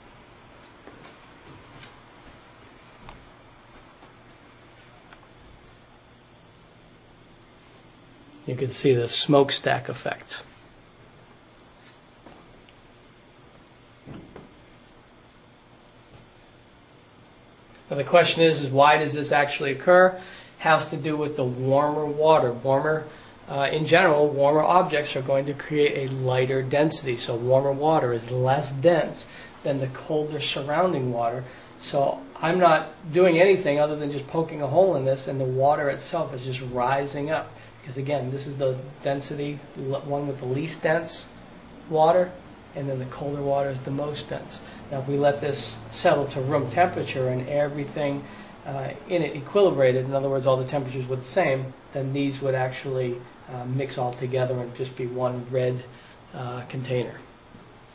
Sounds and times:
Inside, small room: 0.0s - 57.9s
Speech: 8.4s - 10.6s, 17.9s - 57.3s.

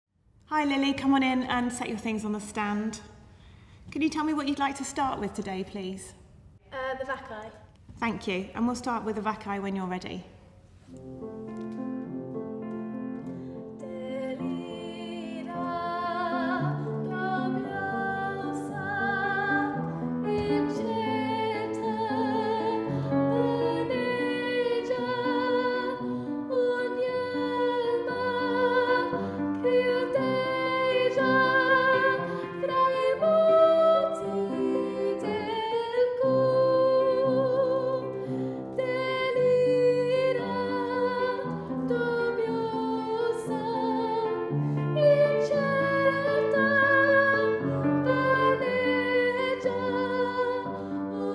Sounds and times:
Music: 10.5s - 51.3s
Female singing: 13.8s - 38.1s, 38.8s - 44.4s, 45.0s - 51.3s.

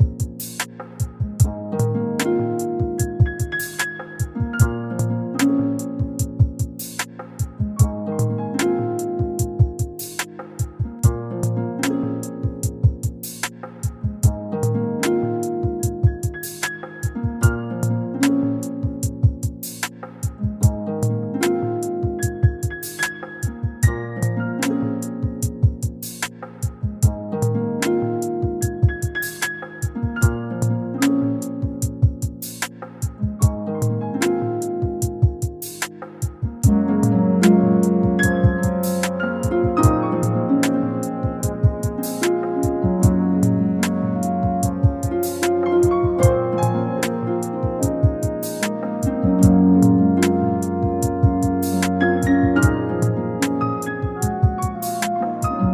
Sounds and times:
Music: 0.0s - 55.7s.

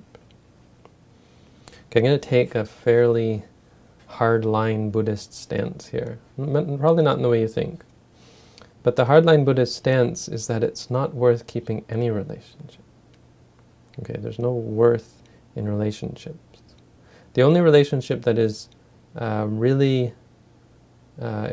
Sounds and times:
Speech: 1.9s - 3.5s, 4.1s - 7.9s, 8.8s - 12.8s, 14.0s - 16.8s, 17.4s - 20.2s, 21.2s - 21.5s.

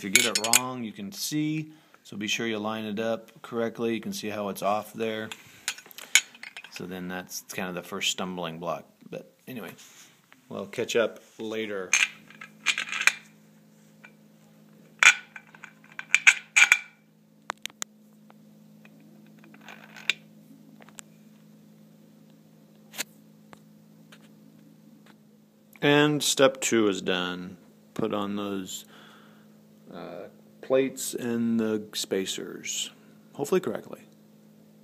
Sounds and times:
Speech: 0.0s - 5.4s, 6.8s - 9.8s, 10.5s - 11.9s, 25.8s - 28.9s, 29.9s - 34.1s.

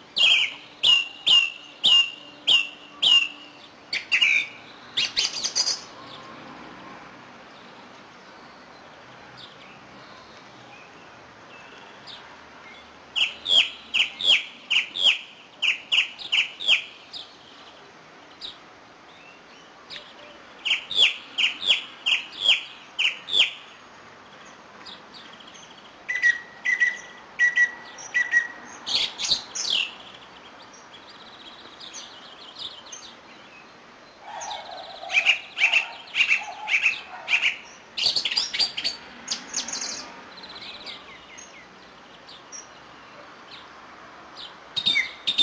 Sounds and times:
Chirp, tweet: 7.6s - 23.6s, 24.3s - 43.7s, 44.4s - 45.4s.

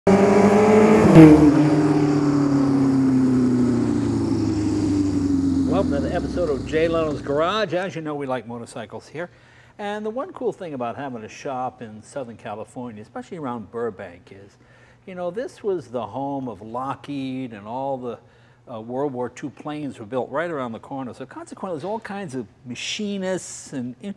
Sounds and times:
Motorcycle: 0.1s - 7.5s.

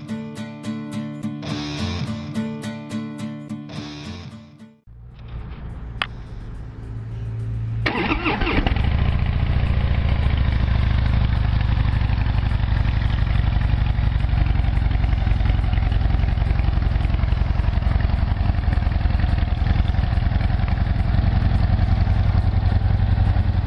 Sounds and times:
Motorcycle: 4.9s - 23.6s.

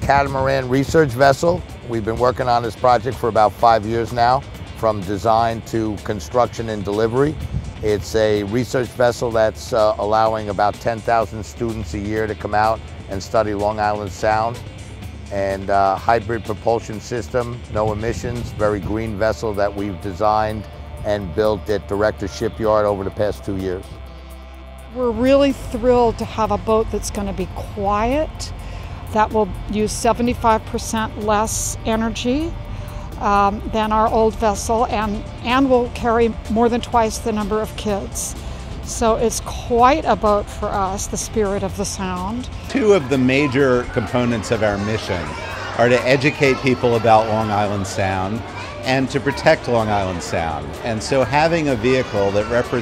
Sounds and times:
Music: 0.0s - 52.8s.

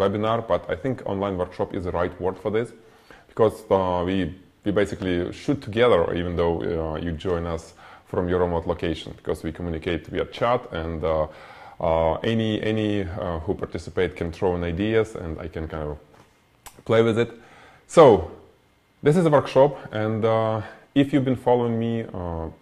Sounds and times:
Speech: 0.0s - 16.1s, 16.7s - 22.6s.

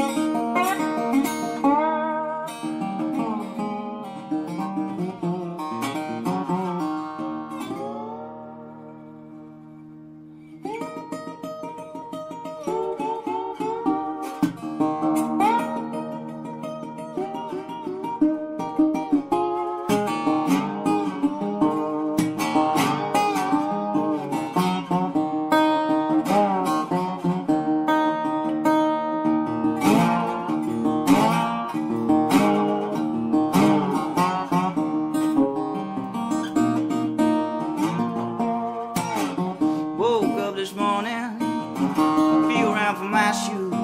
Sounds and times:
Acoustic guitar: 0.0s - 43.8s
Strum: 0.0s - 43.8s.

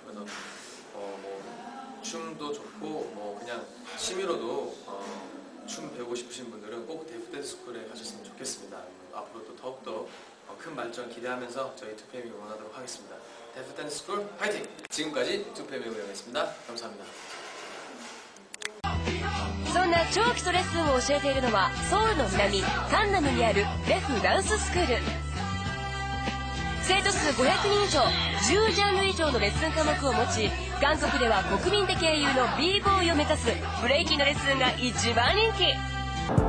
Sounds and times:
Speech: 0.0s - 17.2s.

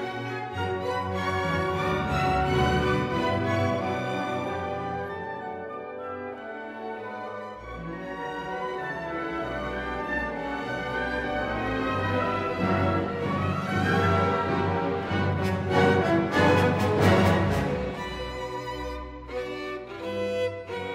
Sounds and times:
Violin, fiddle: 0.0s - 5.2s, 6.8s - 20.9s.

